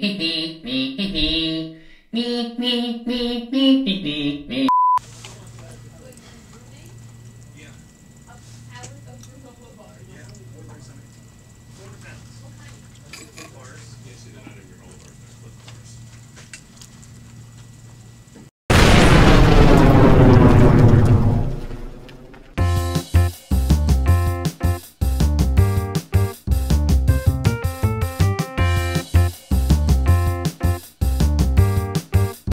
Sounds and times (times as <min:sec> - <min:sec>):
Music: 0:22.6 - 0:32.5.